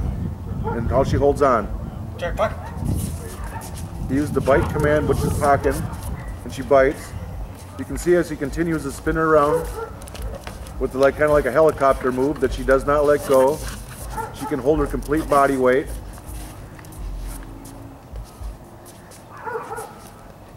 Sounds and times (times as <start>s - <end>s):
Bow-wow: 0.6s - 0.9s, 9.5s - 10.4s, 14.1s - 14.7s, 19.4s - 20.0s
Speech: 4.1s - 7.1s, 7.7s - 9.8s, 10.8s - 13.7s, 14.4s - 16.0s.